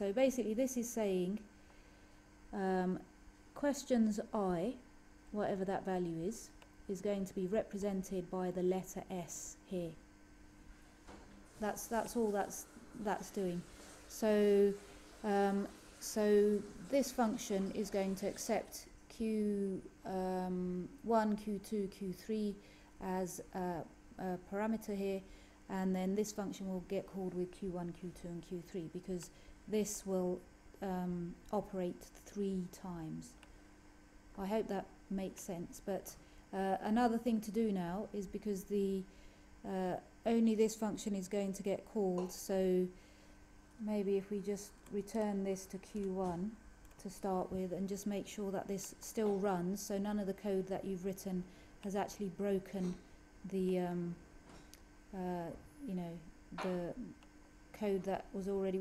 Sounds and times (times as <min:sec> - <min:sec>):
Speech: 0:00.0 - 0:01.5, 0:02.5 - 0:10.0, 0:11.6 - 0:33.4, 0:34.4 - 0:43.0, 0:43.8 - 0:54.2, 0:55.1 - 0:58.8.